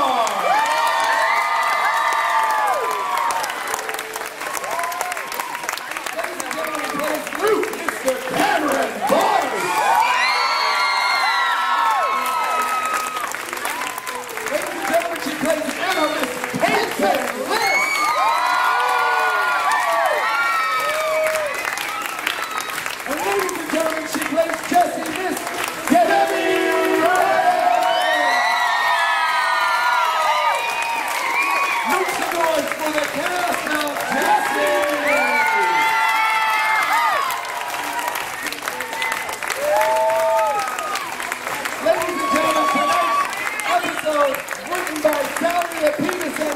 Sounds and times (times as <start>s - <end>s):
Speech: 6.1s - 9.7s, 23.1s - 28.2s, 31.9s - 35.8s, 41.8s - 46.5s.